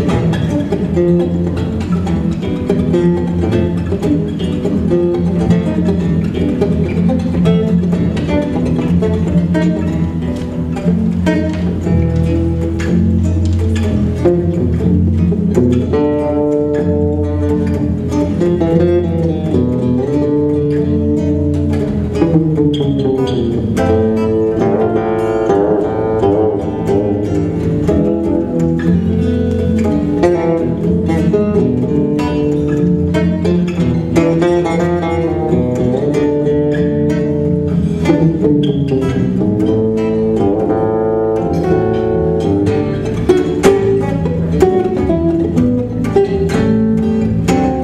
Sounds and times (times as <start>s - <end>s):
Acoustic guitar: 0.0s - 47.8s
Electric guitar: 0.0s - 47.8s
Strum: 0.0s - 47.8s.